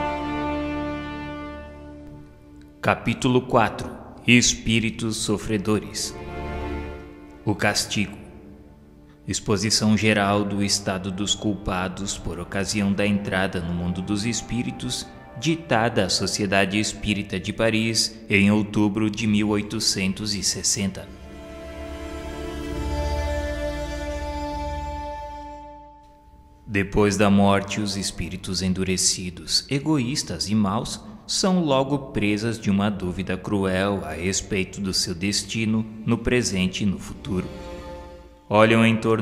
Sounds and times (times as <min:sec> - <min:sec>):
Music: 0:00.0 - 0:39.2
Speech: 0:02.8 - 0:06.2, 0:07.4 - 0:08.3, 0:09.2 - 0:21.1, 0:26.7 - 0:37.5, 0:38.5 - 0:39.2.